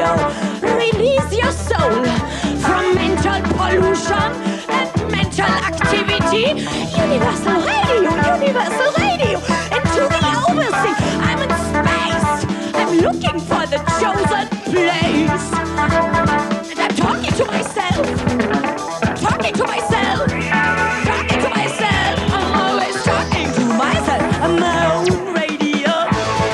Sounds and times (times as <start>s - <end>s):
Singing: 0.0s - 15.6s, 21.0s - 26.5s
Pop music: 0.0s - 26.5s.